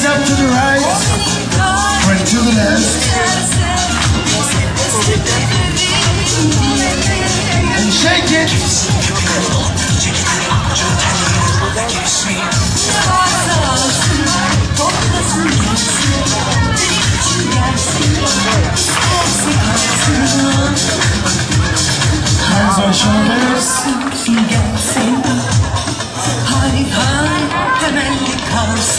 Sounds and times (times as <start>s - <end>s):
Inside, large room or hall: 0.0s - 28.9s
Music: 0.0s - 28.9s
Speech: 1.9s - 3.6s, 4.2s - 28.9s.